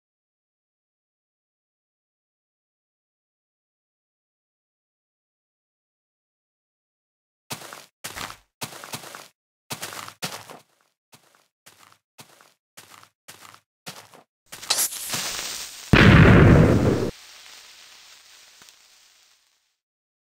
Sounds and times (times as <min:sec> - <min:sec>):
Explosion: 0:14.7 - 0:17.2.